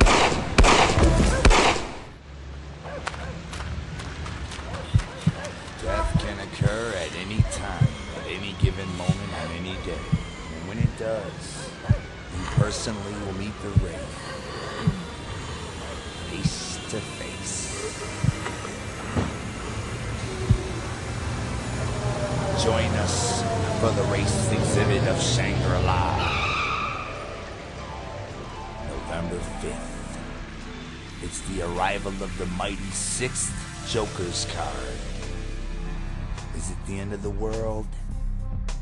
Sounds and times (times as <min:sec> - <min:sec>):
Speech: 0:05.8 - 0:11.7, 0:12.3 - 0:14.1, 0:16.3 - 0:18.0, 0:22.5 - 0:26.4, 0:28.8 - 0:29.9, 0:31.2 - 0:35.1, 0:36.6 - 0:38.1
Music: 0:26.8 - 0:38.8.